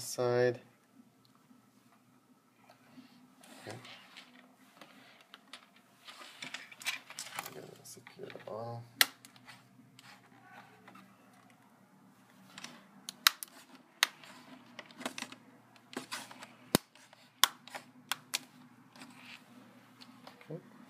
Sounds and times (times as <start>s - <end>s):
Inside, small room: 0.0s - 20.8s.